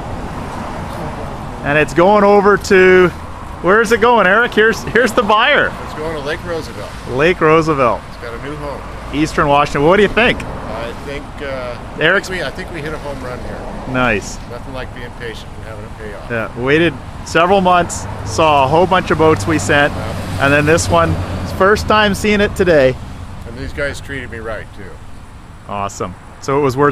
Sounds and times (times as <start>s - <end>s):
Vehicle: 0.0s - 26.9s
Speech: 0.9s - 25.0s, 25.7s - 26.9s.